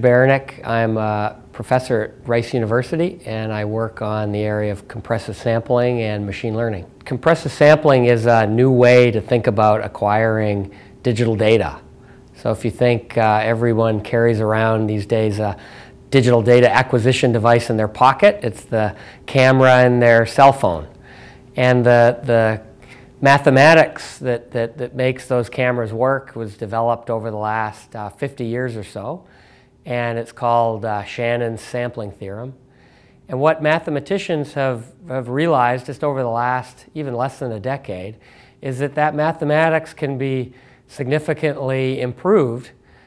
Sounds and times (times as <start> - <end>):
Speech: 0.0 - 21.0, 21.6 - 29.3, 29.9 - 32.6, 33.3 - 42.8.